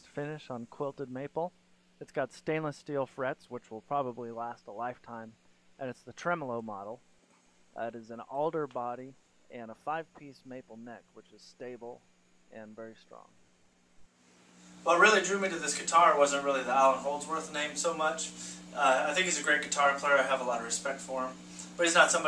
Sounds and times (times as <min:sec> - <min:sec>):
Speech: 0:00.0 - 0:07.0, 0:07.8 - 0:13.3, 0:14.9 - 0:22.2.